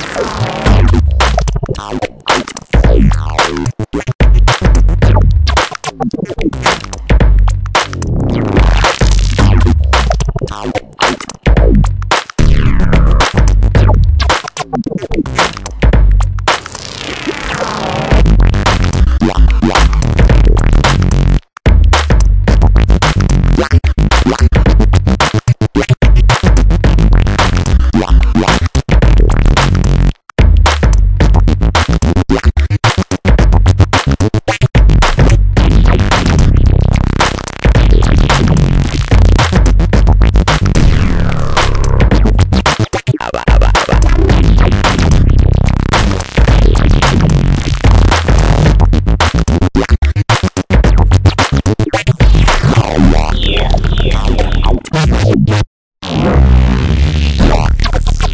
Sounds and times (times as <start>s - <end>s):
Music: 0.0s - 58.3s.